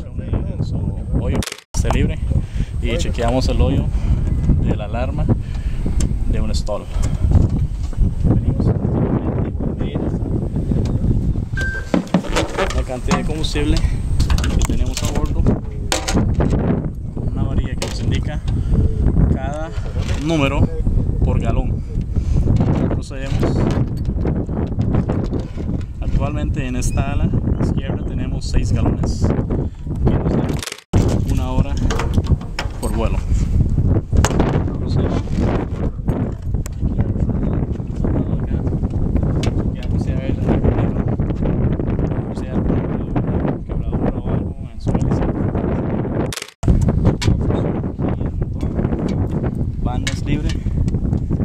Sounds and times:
Speech: 0.0 - 3.9, 4.6 - 5.3, 6.3 - 7.0, 8.3 - 10.2, 12.6 - 13.9, 14.6 - 15.5, 17.3 - 18.4, 19.3 - 21.8, 22.8 - 23.7, 26.0 - 29.3, 31.2 - 31.9, 32.8 - 33.2, 34.5 - 35.4, 36.8 - 38.7, 39.8 - 41.1, 42.3 - 45.4, 48.0 - 49.1, 49.8 - 50.6.

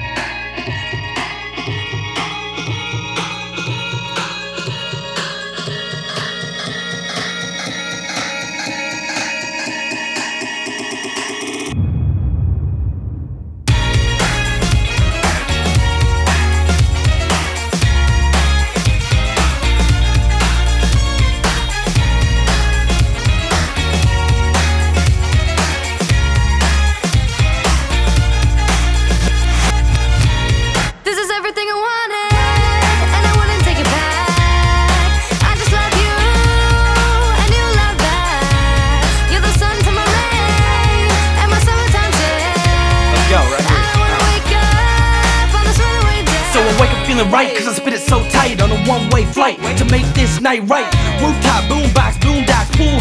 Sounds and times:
Rhythm and blues: 0.0 - 11.8, 13.7 - 31.7, 32.3 - 53.0.

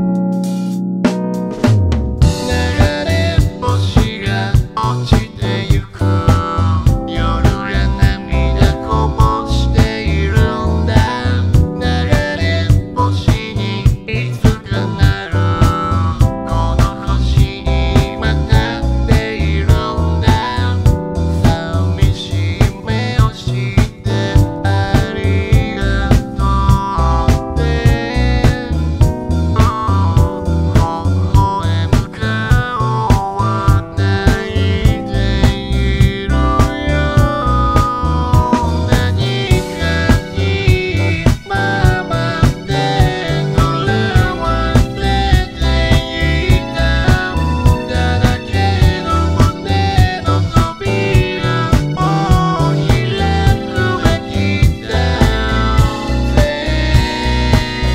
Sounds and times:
Music: 0.0 - 57.9.

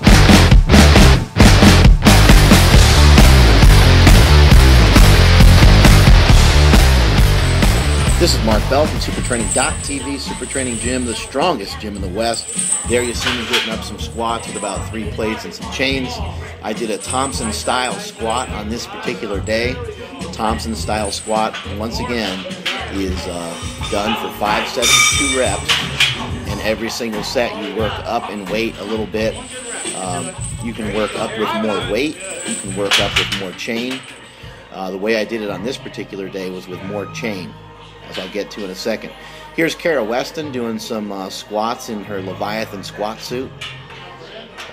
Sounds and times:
Music: 0.0 - 44.7
Speech: 8.2 - 34.1, 34.7 - 44.7.

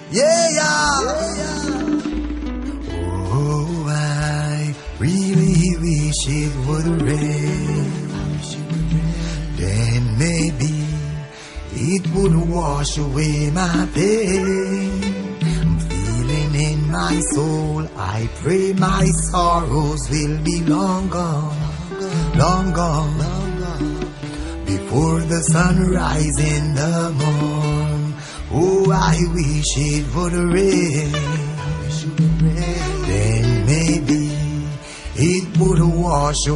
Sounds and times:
Music: 0.0 - 36.5.

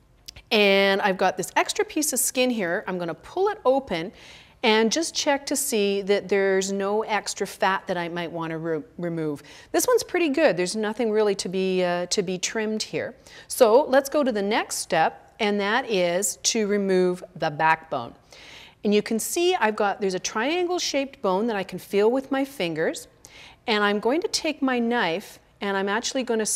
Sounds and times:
Speech: 0.3 - 18.2, 18.9 - 23.1, 23.7 - 26.5.

